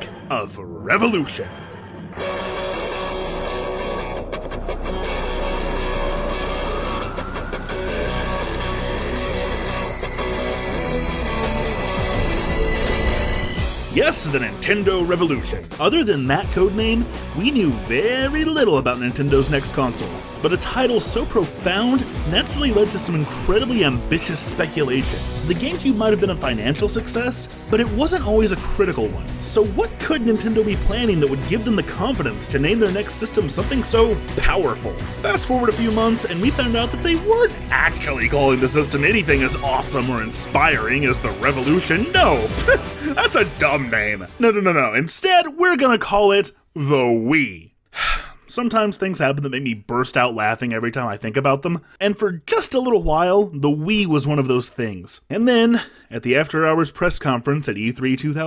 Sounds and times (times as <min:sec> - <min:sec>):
Speech: 0:00.0 - 0:01.5, 0:13.9 - 0:47.7, 0:48.5 - 0:58.4
Music: 0:00.0 - 0:46.1.